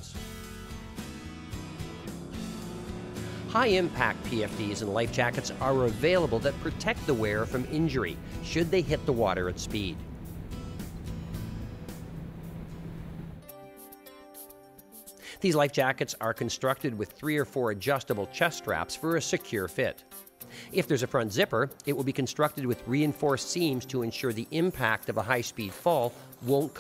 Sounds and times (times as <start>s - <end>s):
Music: 0.0s - 26.8s
Speech: 3.5s - 10.0s, 15.4s - 20.0s, 20.8s - 26.8s.